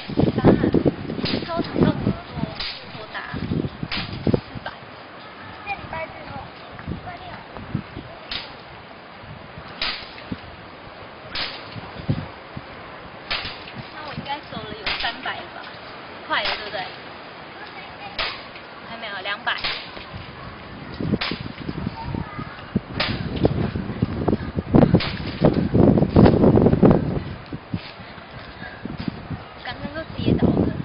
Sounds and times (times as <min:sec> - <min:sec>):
Outside, urban or manmade: 0:00.0 - 0:30.8.